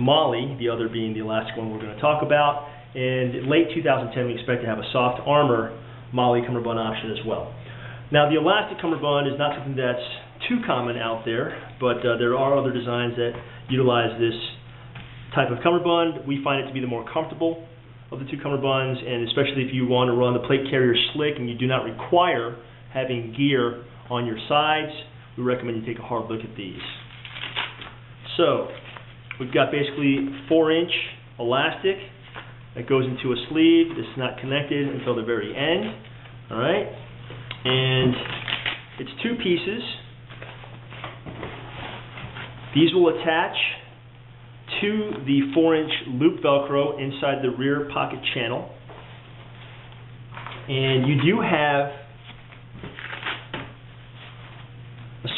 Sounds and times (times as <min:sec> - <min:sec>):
Speech: 0:00.0 - 0:14.6, 0:15.3 - 0:27.1, 0:28.2 - 0:28.8, 0:29.4 - 0:32.2, 0:32.8 - 0:37.0, 0:37.6 - 0:38.4, 0:39.0 - 0:40.1, 0:42.7 - 0:43.9, 0:44.7 - 0:48.8, 0:50.7 - 0:52.1.